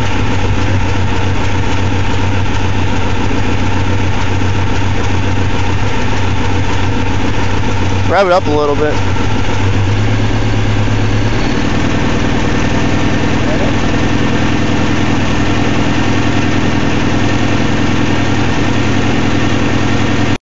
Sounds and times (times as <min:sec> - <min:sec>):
Idling: 0:00.0 - 0:20.4
Medium engine (mid frequency): 0:00.0 - 0:20.4
Vehicle: 0:00.0 - 0:20.4.